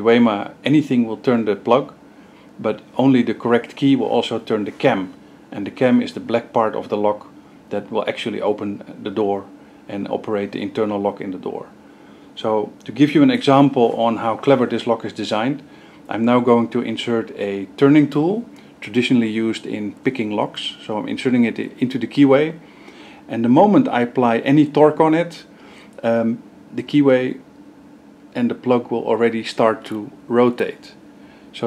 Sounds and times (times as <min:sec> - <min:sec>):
Speech: 0:00.0 - 0:02.0, 0:02.6 - 0:11.8, 0:12.4 - 0:22.6, 0:23.3 - 0:27.4, 0:28.3 - 0:31.6.